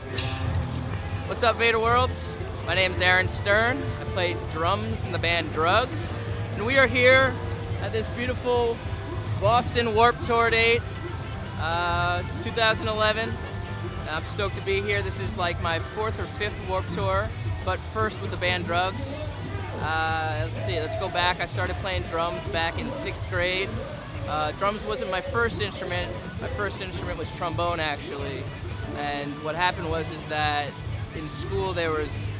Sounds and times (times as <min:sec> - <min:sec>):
Music: 0:00.0 - 0:32.3
Speech: 0:01.3 - 0:08.8, 0:09.4 - 0:10.8, 0:11.6 - 0:32.3.